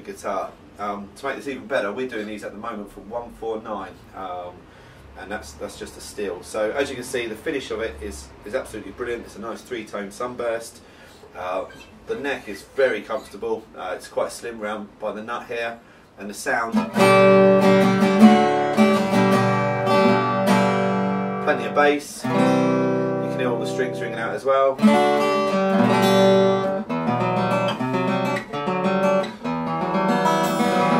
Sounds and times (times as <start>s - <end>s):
Speech: 0.0s - 4.6s, 5.2s - 16.9s, 21.4s - 22.3s, 23.2s - 24.8s
Acoustic guitar: 16.6s - 31.0s
Strum: 16.7s - 31.0s.